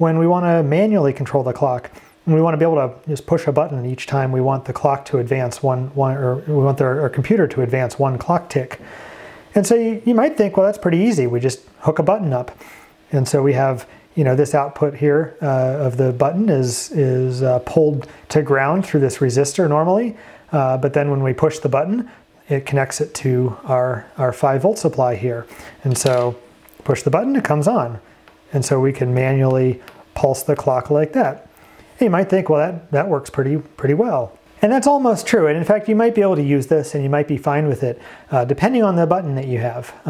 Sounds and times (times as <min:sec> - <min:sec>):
Speech: 0:00.0 - 0:08.8, 0:09.5 - 0:40.0.